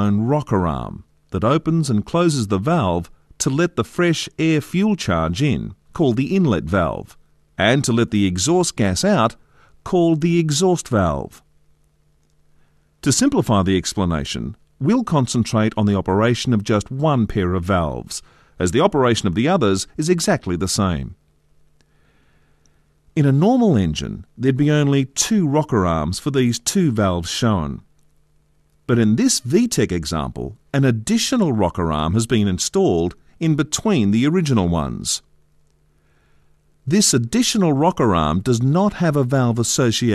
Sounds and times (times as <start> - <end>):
Speech: 0.0 - 11.5, 13.0 - 21.2, 23.2 - 27.9, 28.9 - 35.3, 36.9 - 40.1.